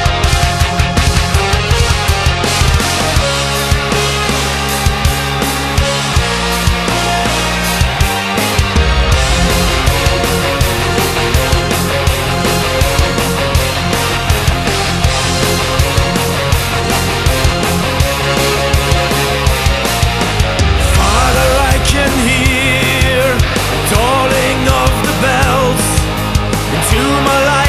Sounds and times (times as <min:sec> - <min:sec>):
Music: 0:00.0 - 0:27.6.